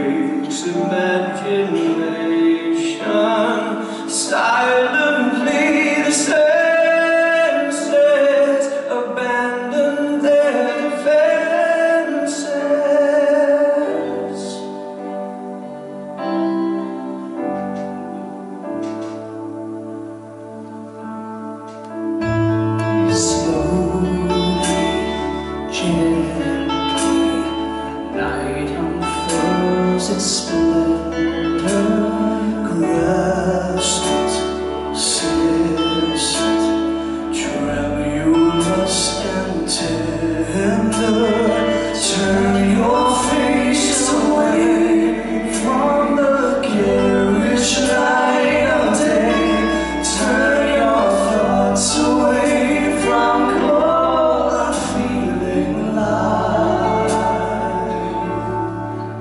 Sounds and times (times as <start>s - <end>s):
Tender music: 0.0s - 59.2s.